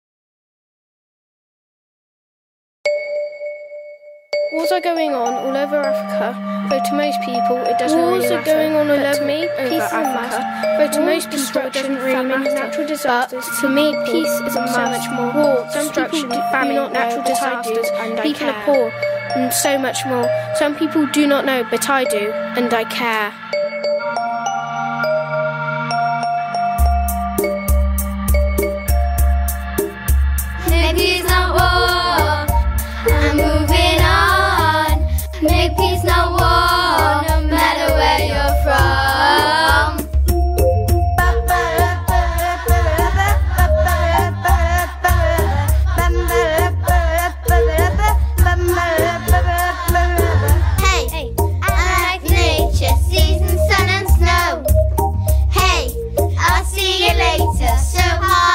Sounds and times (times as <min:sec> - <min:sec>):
Music: 0:04.4 - 0:58.5
Child speech, kid speaking: 0:04.6 - 0:23.4, 0:50.8 - 0:54.6.